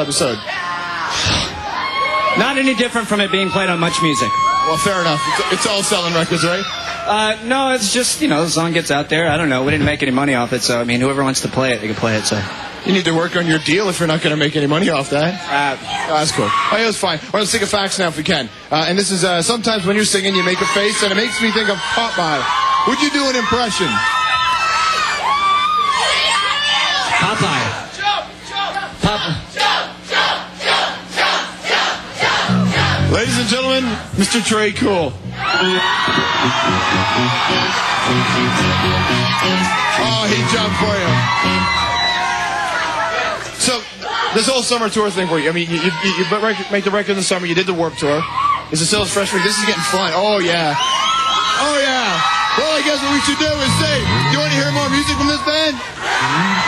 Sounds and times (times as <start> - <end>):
Speech: 2.4 - 24.0, 43.6 - 50.8, 51.6 - 55.8.